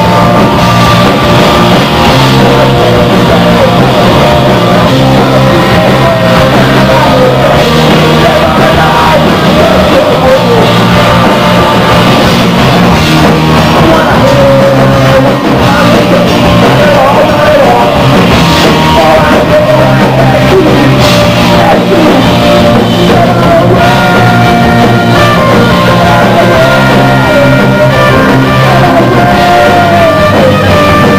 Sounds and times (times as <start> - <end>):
Music: 0.0 - 31.1.